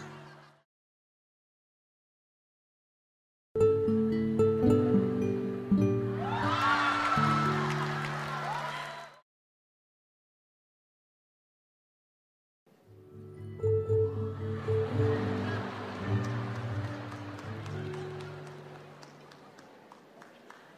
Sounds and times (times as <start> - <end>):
Music: 3.6 - 9.2, 12.7 - 20.0.